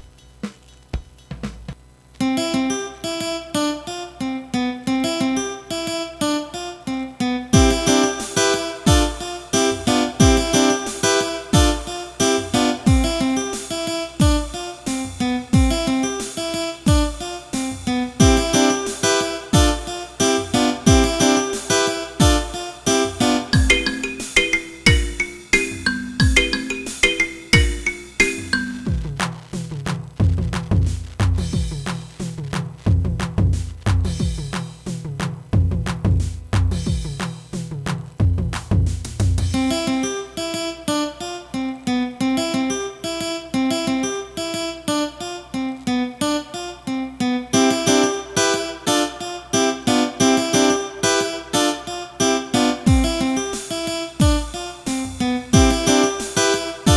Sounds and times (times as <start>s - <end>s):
Drum kit: 0.0s - 1.9s, 7.6s - 39.8s, 47.6s - 56.9s
Bass drum: 15.6s - 15.9s, 24.9s - 25.3s, 28.8s - 39.6s, 52.9s - 53.2s, 54.2s - 54.6s, 55.2s - 55.9s.